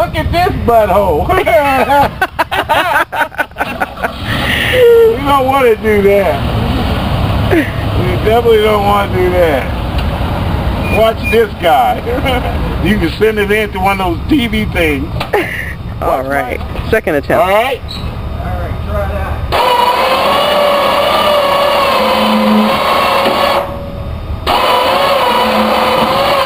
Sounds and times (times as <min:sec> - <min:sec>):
Vehicle: 0:00.0 - 0:26.4.